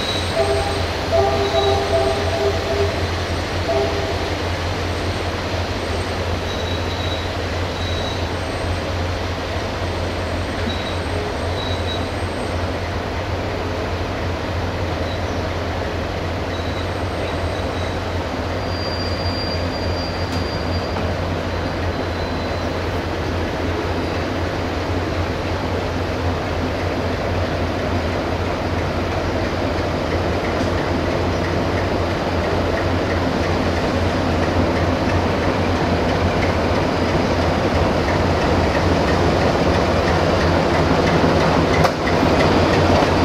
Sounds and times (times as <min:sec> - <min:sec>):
Railroad car, train wagon: 0:00.0 - 0:43.2
Train: 0:00.0 - 0:43.2.